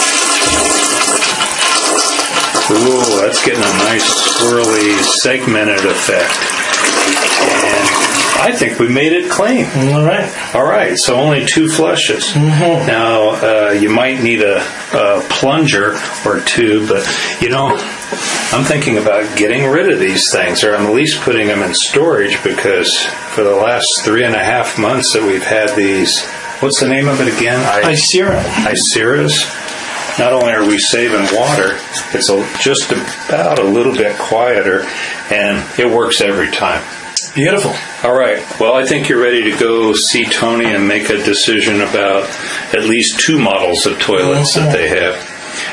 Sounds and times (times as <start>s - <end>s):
Toilet flush: 0.0s - 45.7s
Speech: 2.7s - 6.4s, 7.6s - 17.9s, 18.5s - 29.6s, 30.2s - 45.2s.